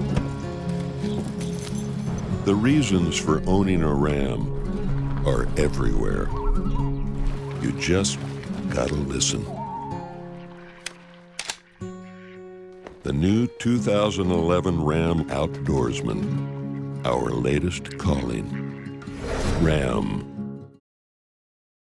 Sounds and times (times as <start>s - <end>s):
Music: 0.0s - 20.8s
Speech: 2.5s - 4.5s, 5.2s - 6.4s, 7.6s - 9.6s, 13.1s - 16.3s, 17.0s - 18.5s, 19.5s - 20.3s.